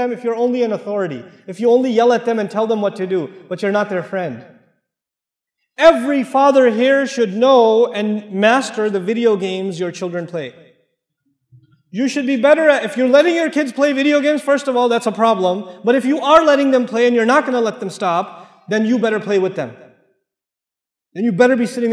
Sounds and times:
Speech: 0.0 - 4.5, 5.8 - 10.5, 12.0 - 19.8, 21.2 - 21.9.

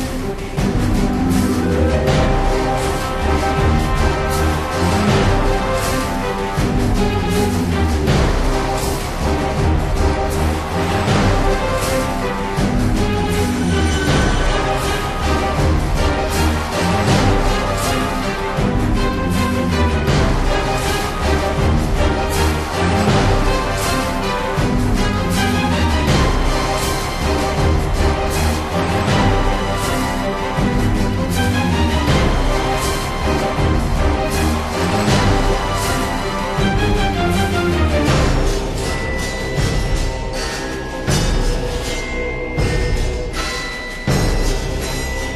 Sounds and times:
Music: 0.0 - 45.3.

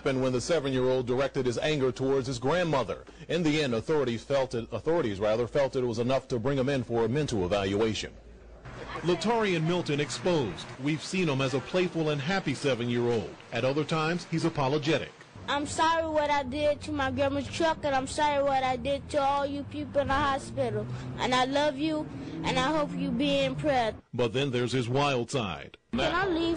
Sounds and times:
Speech: 8.9 - 26.5.

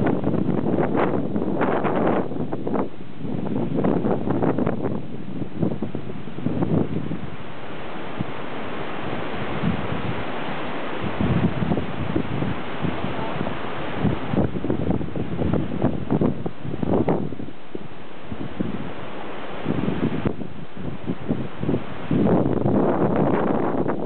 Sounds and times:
Ocean: 0.0 - 24.0.

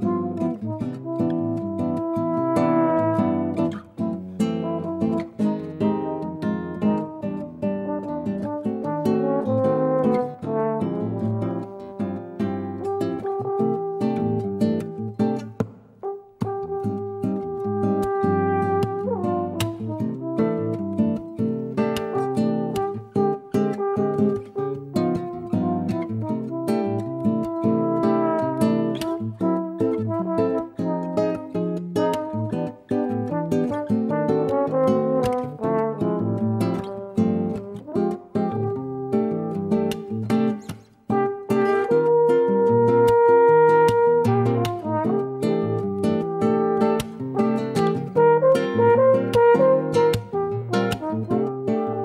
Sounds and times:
French horn: 0.0 - 52.0.

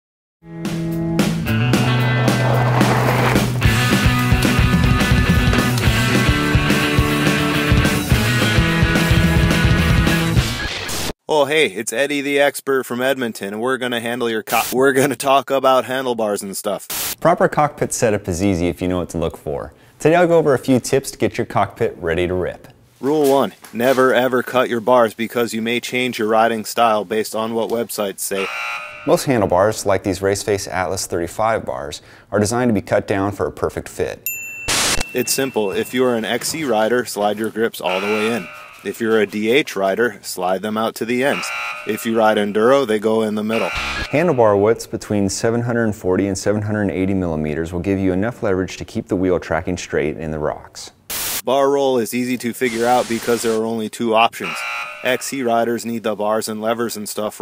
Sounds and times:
Music: 0.4 - 11.1
Bicycle: 2.2 - 3.6.

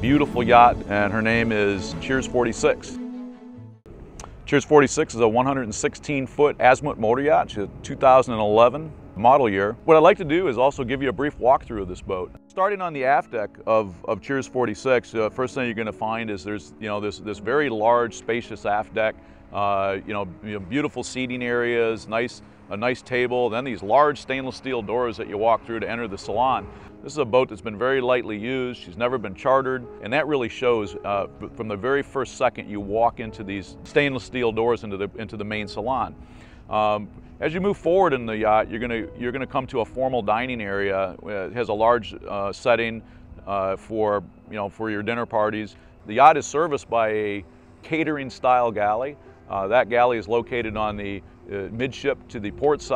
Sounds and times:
Speech: 0.0 - 3.0, 4.5 - 36.1, 36.7 - 52.9
Music: 0.0 - 52.9.

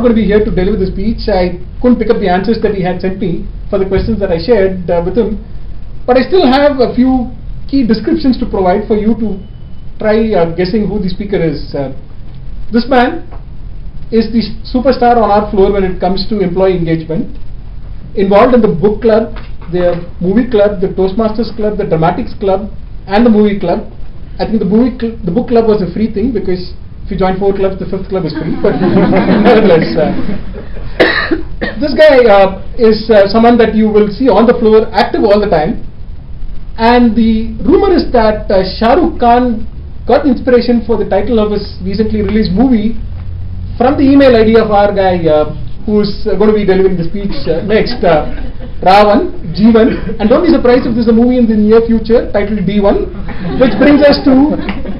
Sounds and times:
Male speech, man speaking: 0.0 - 5.4, 6.1 - 9.4, 10.0 - 12.0, 12.8 - 13.3, 14.1 - 17.4, 18.2 - 30.3, 31.8 - 35.8, 36.8 - 43.0, 43.8 - 54.7
Narration, monologue: 0.0 - 54.9.

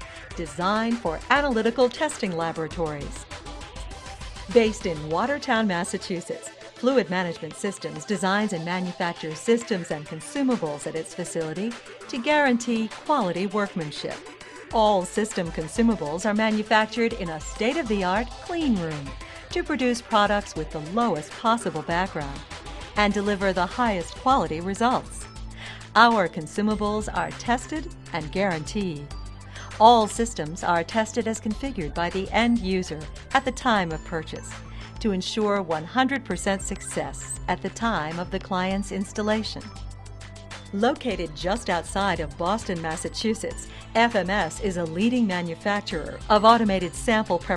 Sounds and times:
Music: 0.0 - 47.5
Speech: 0.4 - 3.2, 4.5 - 22.4, 23.0 - 25.2, 26.0 - 39.7, 40.8 - 47.5.

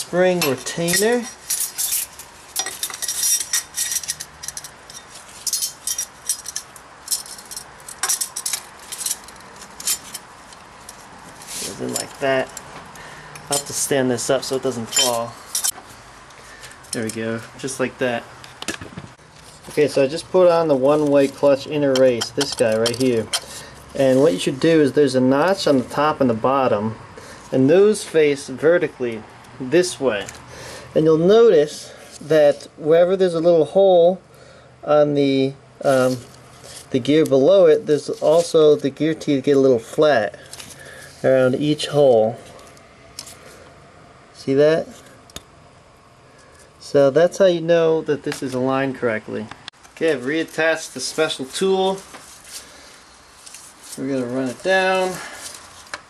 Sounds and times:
Speech: 0.0 - 1.4, 11.6 - 12.5, 13.5 - 15.4, 17.0 - 18.3, 19.7 - 23.4, 24.0 - 30.3, 31.0 - 34.2, 34.8 - 36.3, 36.9 - 40.4, 41.2 - 42.4, 44.4 - 45.0, 46.8 - 52.1, 54.0 - 55.4.

